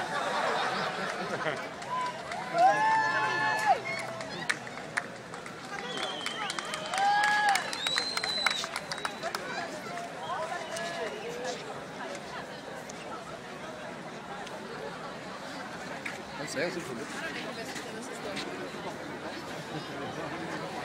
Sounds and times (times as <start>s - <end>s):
Speech: 9.0s - 20.8s.